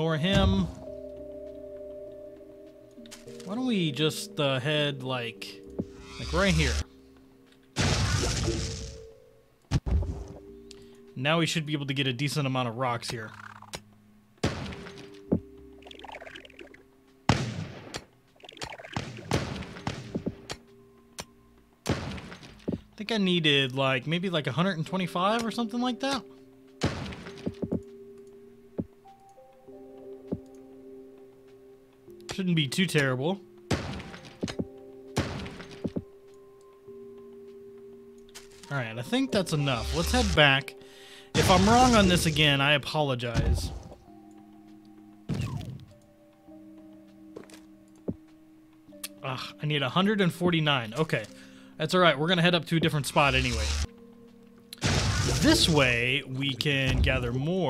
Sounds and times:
Speech: 0.0s - 0.8s, 3.4s - 5.6s, 6.2s - 6.8s, 11.2s - 13.4s, 23.0s - 26.2s, 32.3s - 33.4s, 38.7s - 40.7s, 41.4s - 43.8s, 49.2s - 53.7s, 55.4s - 57.6s
Music: 0.0s - 57.6s.

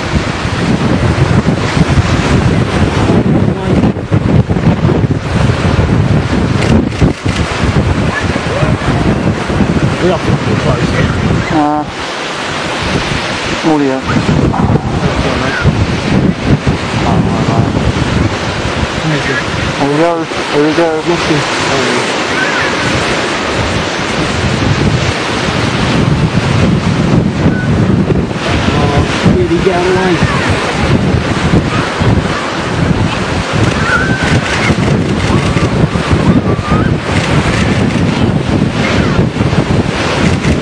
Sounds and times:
Water: 0.0s - 40.6s
Speech: 10.0s - 11.9s, 15.0s - 15.7s, 19.0s - 22.1s, 28.7s - 30.7s.

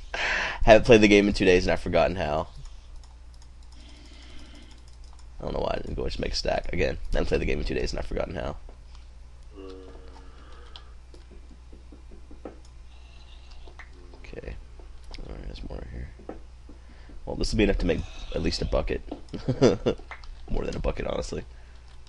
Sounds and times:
Speech: 0.6s - 2.5s, 5.4s - 8.6s, 17.3s - 19.0s, 20.5s - 21.5s.

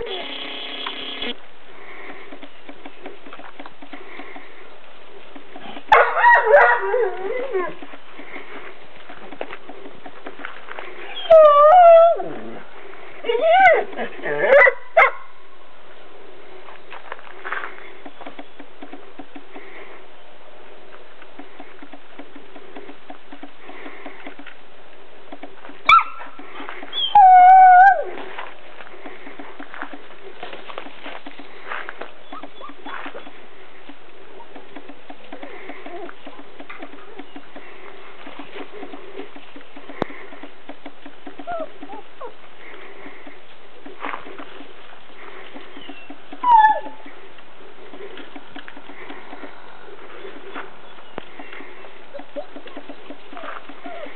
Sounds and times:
Dog: 5.9s - 7.8s, 13.2s - 15.3s, 32.2s - 33.4s, 46.4s - 47.0s, 53.4s - 54.1s.

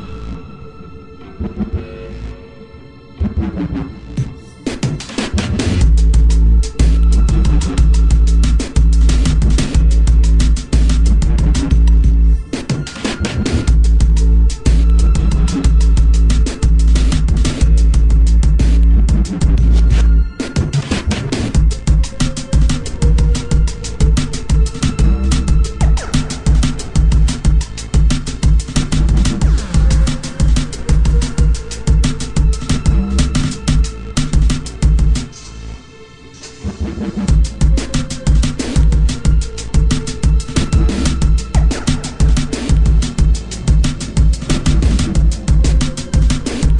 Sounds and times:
Background music: 0.0s - 46.7s.

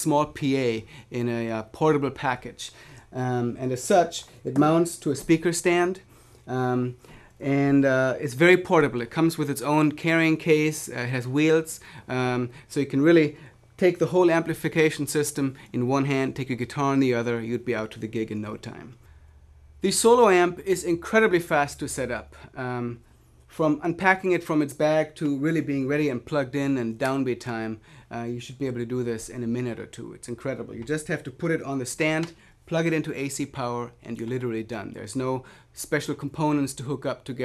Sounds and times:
Speech: 0.0s - 19.0s, 19.8s - 37.4s.

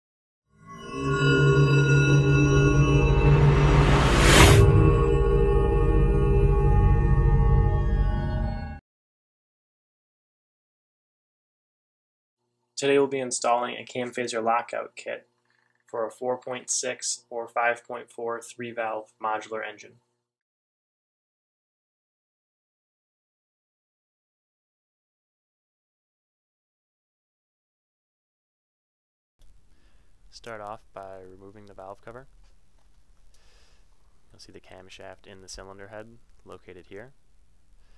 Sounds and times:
Music: 0.5s - 8.8s.

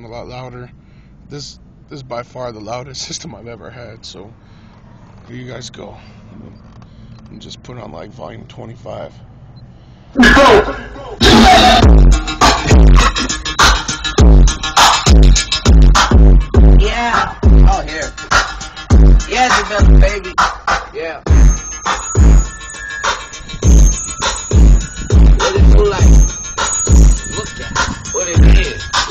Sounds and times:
Music: 11.2s - 29.1s.

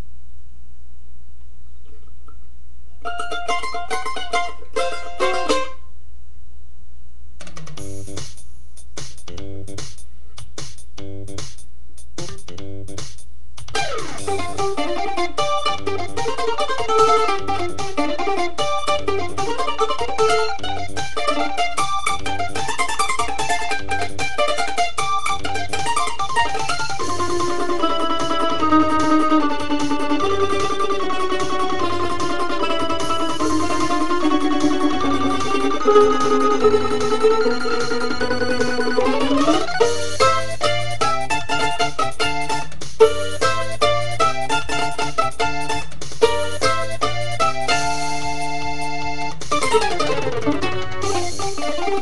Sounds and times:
Mandolin: 1.8s - 6.0s, 13.6s - 52.0s
Guitar: 3.0s - 5.9s, 13.6s - 52.0s.

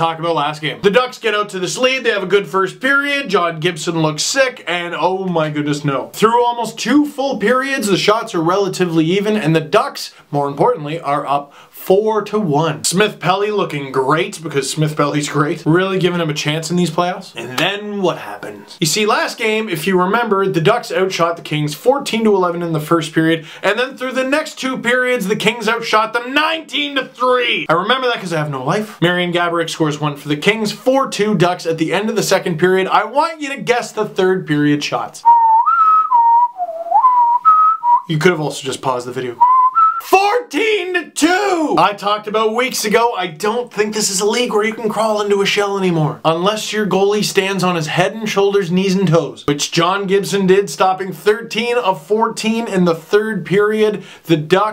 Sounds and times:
Whistling: 35.2s - 38.1s, 39.4s - 40.2s.

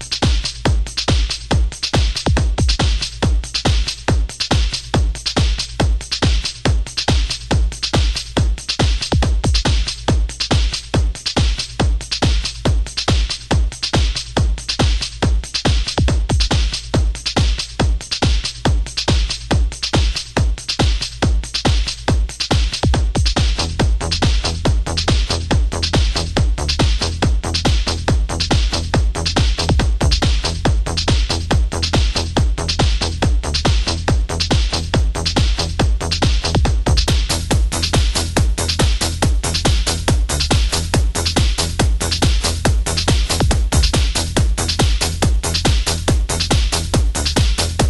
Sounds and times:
Disco: 0.0s - 47.8s.

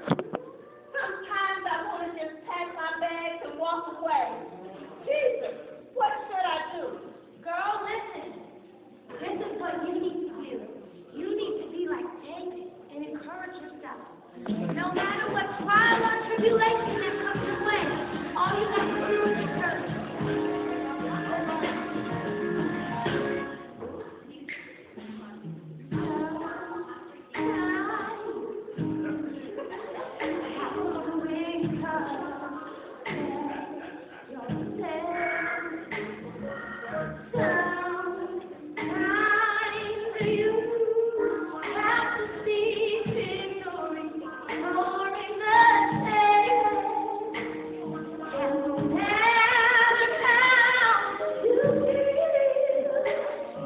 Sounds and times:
Music: 14.4s - 53.6s
Female singing: 14.6s - 22.2s, 26.0s - 29.2s, 30.3s - 53.6s.

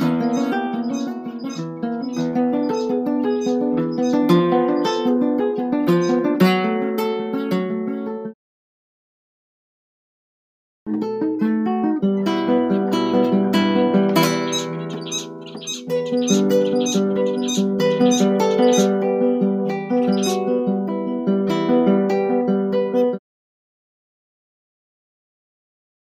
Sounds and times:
Acoustic guitar: 0.0s - 8.4s, 10.9s - 23.2s.

